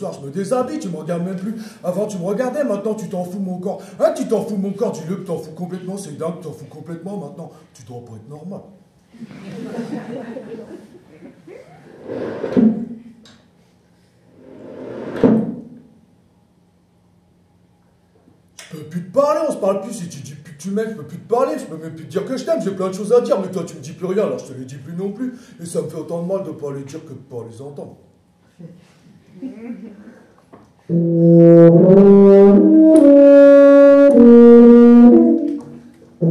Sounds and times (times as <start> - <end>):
Speech: 0.0 - 8.8, 18.6 - 28.8.